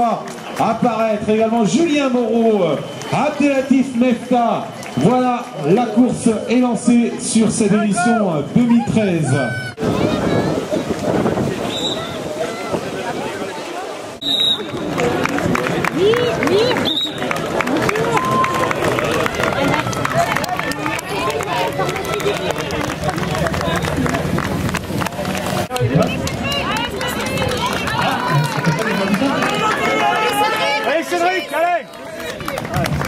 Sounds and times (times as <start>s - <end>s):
Outside, urban or manmade: 0.0s - 33.0s
Run: 2.5s - 6.5s, 14.2s - 33.0s.